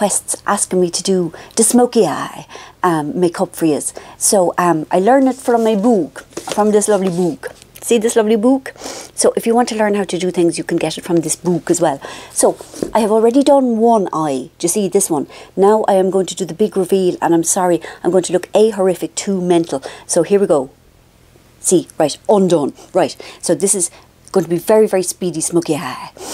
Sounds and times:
Speech: 0.0 - 20.7, 21.6 - 26.2.

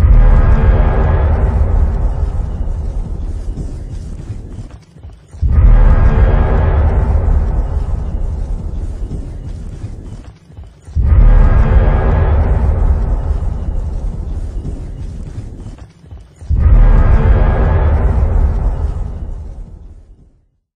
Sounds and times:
Sound effect: 0.0 - 20.5.

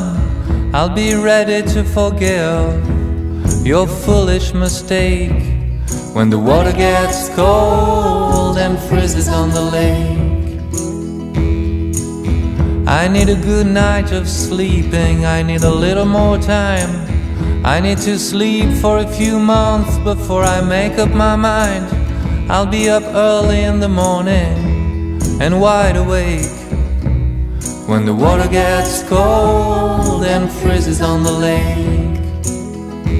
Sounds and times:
Music: 0.0 - 33.1.

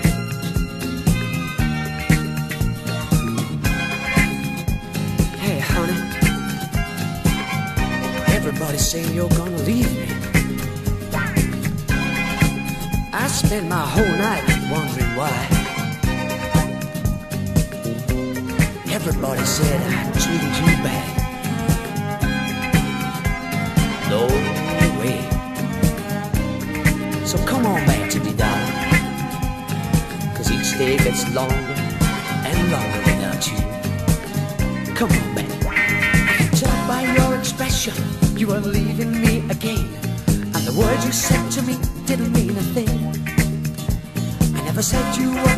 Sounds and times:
Soul music: 0.0 - 45.5.

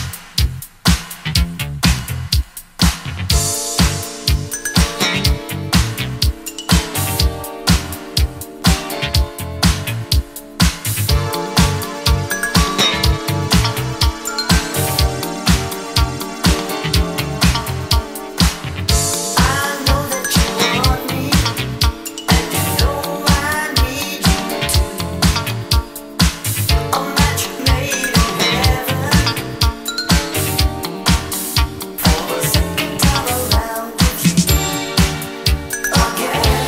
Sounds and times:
Disco: 0.0 - 36.6
Funk: 0.0 - 36.6.

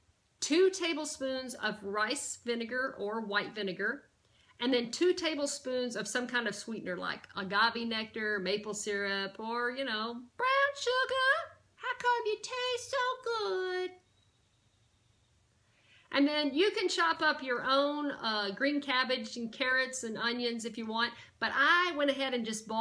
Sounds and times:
Speech: 0.4 - 14.0, 16.1 - 22.8.

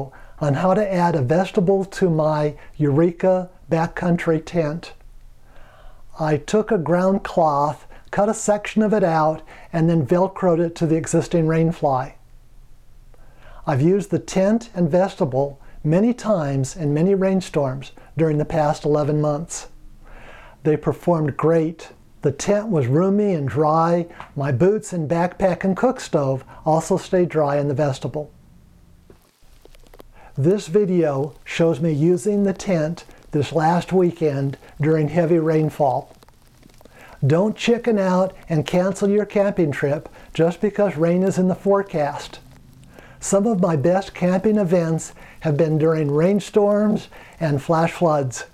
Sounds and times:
Speech: 0.0 - 5.0, 6.1 - 12.2, 13.6 - 19.8, 20.6 - 28.3, 30.4 - 36.2, 37.2 - 42.4, 43.2 - 48.5.

